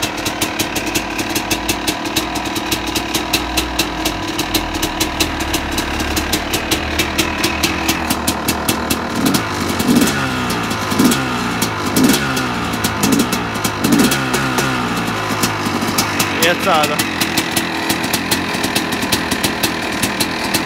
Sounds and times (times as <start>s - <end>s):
Vehicle: 0.0s - 20.6s
Accelerating, revving, vroom: 9.2s - 15.0s
Speech: 16.4s - 17.0s.